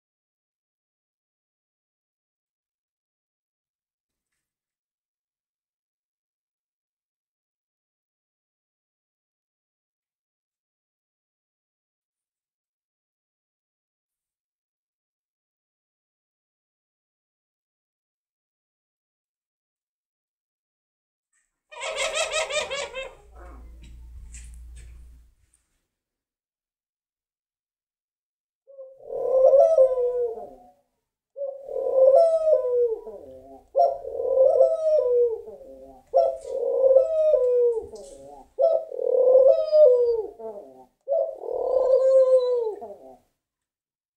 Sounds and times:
Domestic animals, pets: 21.7s - 24.7s
Pigeon, dove: 21.7s - 25.1s, 28.7s - 30.8s, 31.4s - 43.3s.

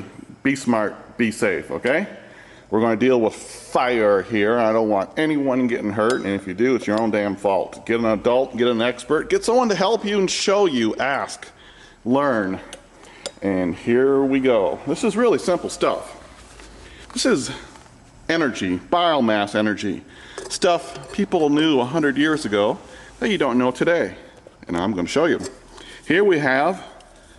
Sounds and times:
Speech: 0.0s - 12.7s, 13.4s - 16.3s, 17.2s - 17.7s, 18.3s - 27.0s.

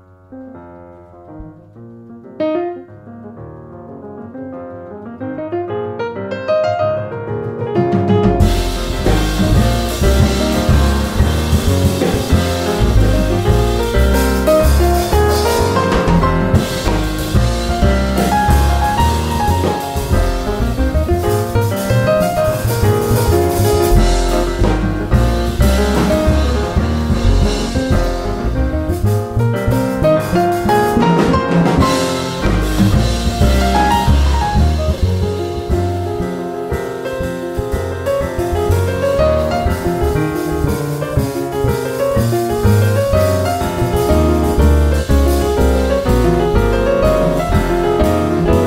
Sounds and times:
Jazz: 0.0s - 48.6s
Piano: 0.0s - 48.6s.

